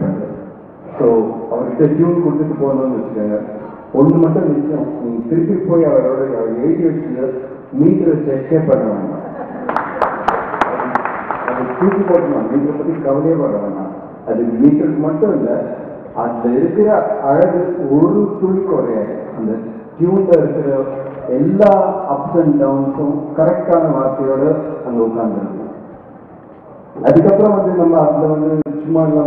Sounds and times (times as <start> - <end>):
Speech: 0.0 - 9.4, 10.6 - 25.6, 27.0 - 29.2.